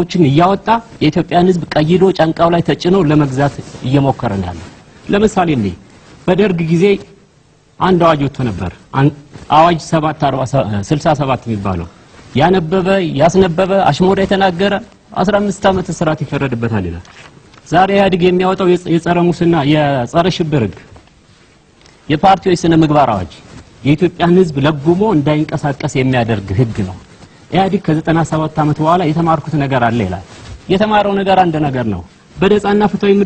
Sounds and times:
Male speech, man speaking: 0.0s - 7.2s, 7.8s - 17.1s, 17.7s - 20.9s, 22.1s - 33.2s
Narration, monologue: 0.0s - 33.2s.

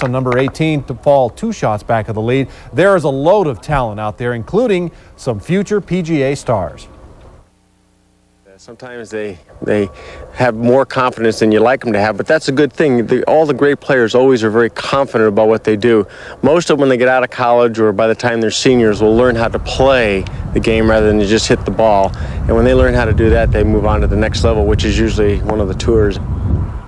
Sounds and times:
Speech: 0.0s - 6.9s, 8.4s - 26.2s.

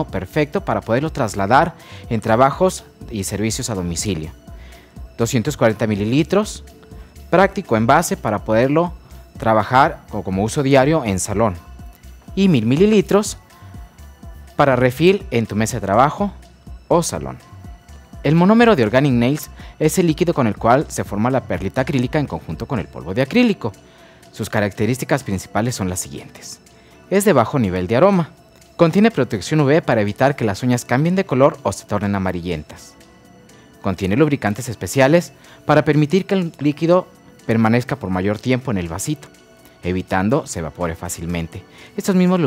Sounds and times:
Speech: 0.0s - 4.4s, 5.2s - 6.7s, 7.3s - 11.7s, 12.3s - 13.4s, 14.6s - 17.4s, 18.2s - 23.8s, 24.4s - 32.9s, 33.8s - 42.4s
Music: 0.0s - 42.4s.

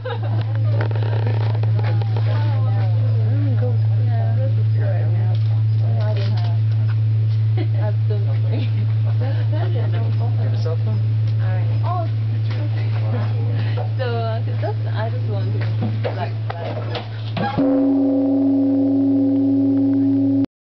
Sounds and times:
Speech: 1.6s - 6.6s, 7.6s - 17.0s.

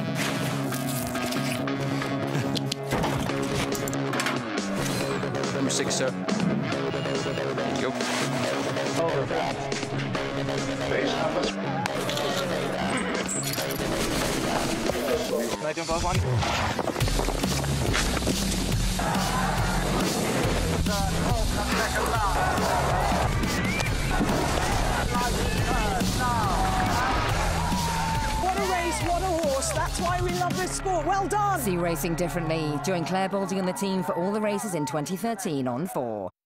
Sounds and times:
Music: 0.0s - 36.3s
Speech: 28.6s - 36.4s.

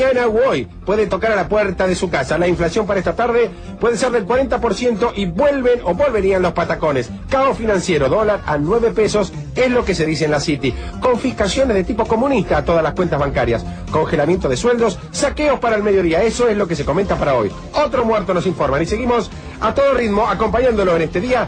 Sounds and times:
Music: 0.0s - 21.4s
Speech: 0.0s - 21.4s.

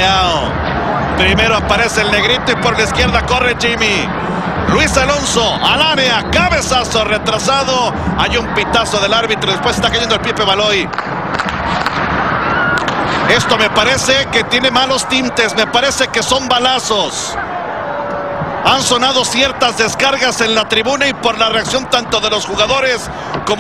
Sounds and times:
Speech: 1.2s - 4.1s, 4.7s - 10.9s, 13.3s - 17.4s, 18.7s - 23.6s.

